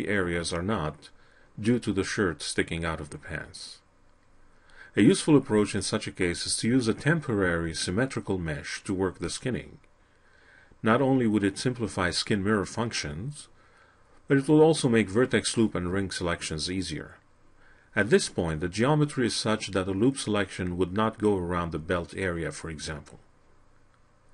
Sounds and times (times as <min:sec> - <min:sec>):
Speech: 0:00.0 - 0:03.9, 0:04.9 - 0:09.8, 0:10.8 - 0:13.6, 0:14.3 - 0:17.2, 0:17.9 - 0:23.3.